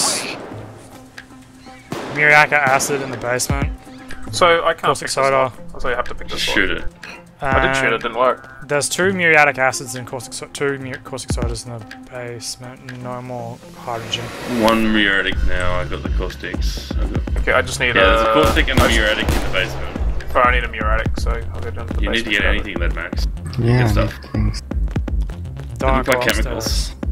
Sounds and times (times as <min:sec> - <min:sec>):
Music: 0:00.0 - 0:27.1
Speech: 0:02.1 - 0:24.6, 0:25.8 - 0:27.0.